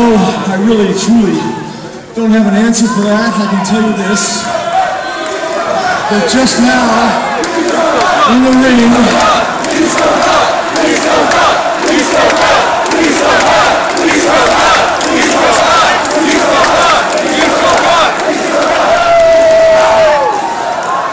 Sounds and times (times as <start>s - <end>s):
Crowd: 0.0s - 21.1s
Cheering: 2.8s - 21.1s.